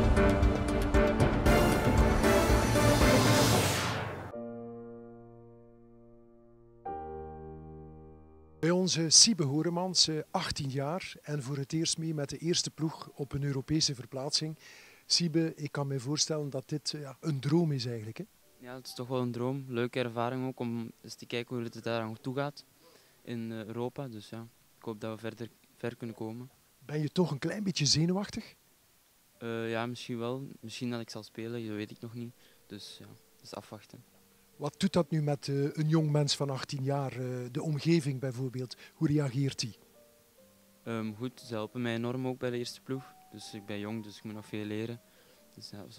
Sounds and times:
Speech: 0:08.6 - 0:22.6, 0:23.3 - 0:28.6, 0:29.4 - 0:34.0, 0:34.6 - 0:39.8, 0:40.9 - 0:45.0, 0:45.6 - 0:45.9.

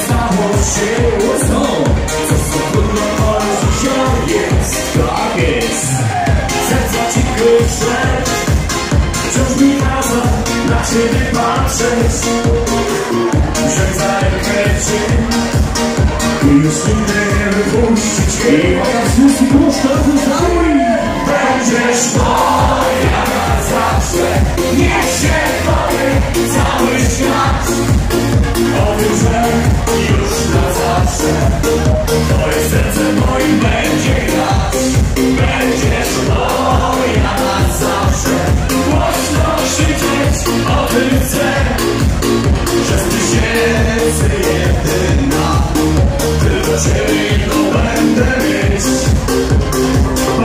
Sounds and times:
Music: 0:00.0 - 0:50.4.

